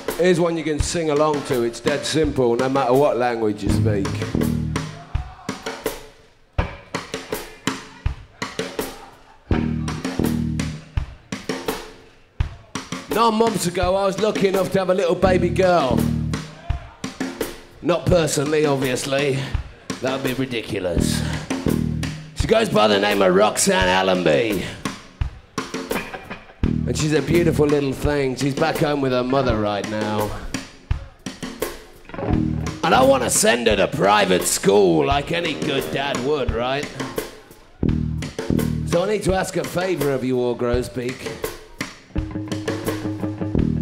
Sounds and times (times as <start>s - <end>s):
Music: 0.0s - 43.8s
Speech: 0.1s - 4.3s, 12.5s - 16.0s, 17.8s - 21.4s, 22.4s - 24.8s, 26.9s - 31.1s, 32.8s - 37.6s, 38.9s - 41.5s.